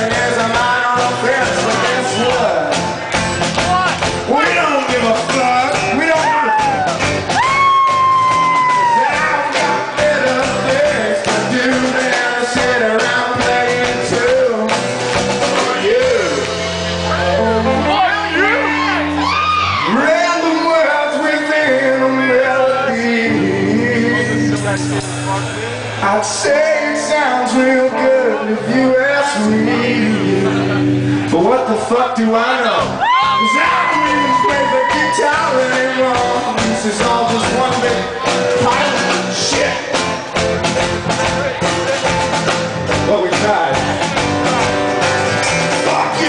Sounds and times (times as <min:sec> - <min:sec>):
Music: 0:00.0 - 0:46.2.